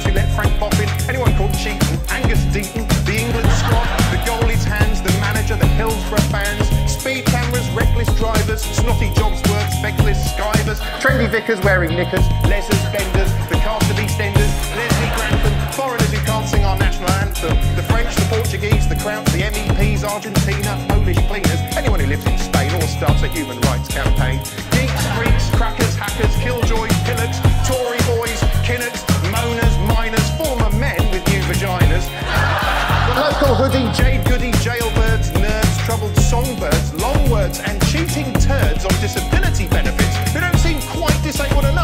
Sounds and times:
Speech: 0.0 - 32.1, 33.1 - 41.8
Music: 0.0 - 41.8.

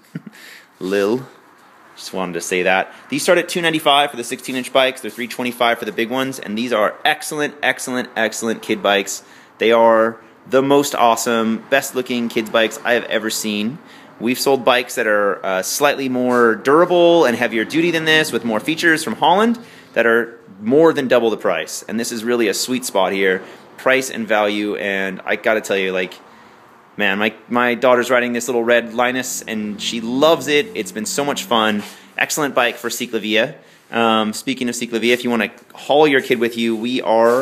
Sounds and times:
Speech: 0.8 - 1.4, 2.0 - 26.2, 27.0 - 37.4.

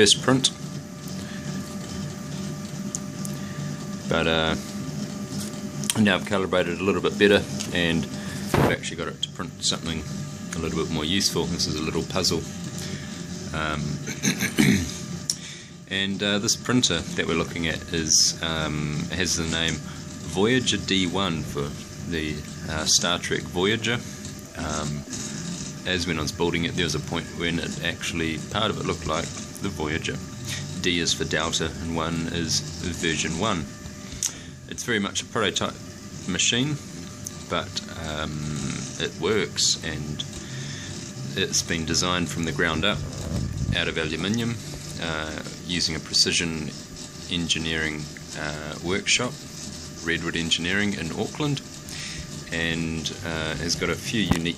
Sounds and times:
Speech: 0.0 - 0.6, 4.1 - 4.6, 5.9 - 12.5, 13.5 - 14.0, 15.9 - 24.0, 24.6 - 25.0, 25.9 - 30.2, 30.8 - 33.7, 34.7 - 36.9, 37.5 - 40.3, 41.3 - 49.4, 50.0 - 51.7, 52.5 - 54.5.

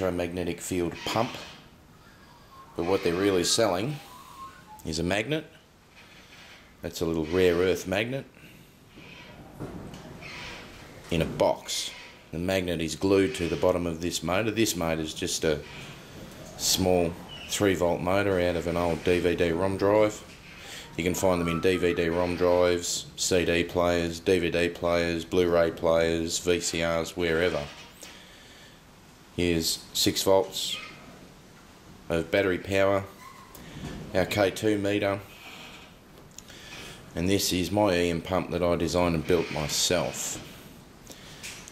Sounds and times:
Speech: 0.0 - 1.5, 2.8 - 4.1, 4.8 - 5.6, 6.8 - 8.4, 11.1 - 15.7, 16.6 - 20.3, 20.9 - 27.8, 29.4 - 31.0, 32.1 - 33.1, 34.1 - 35.3, 37.2 - 40.5.

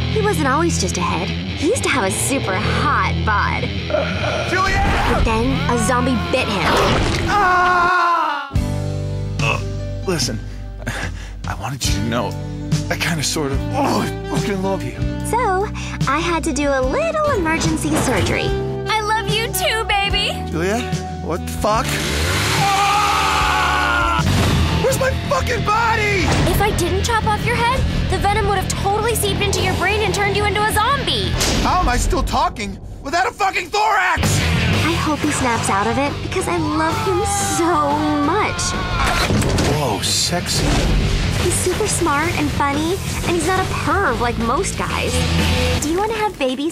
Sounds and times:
Music: 0.0 - 46.7.

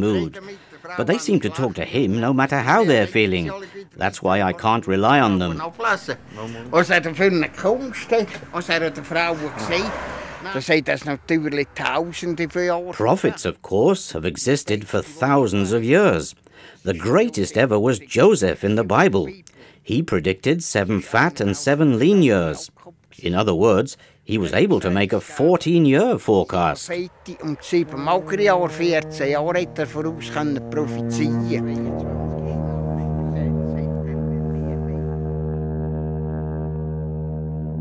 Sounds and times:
Speech: 0.0 - 35.0
Music: 5.6 - 8.5, 27.2 - 37.8
Foghorn: 5.6 - 10.5, 27.0 - 37.8.

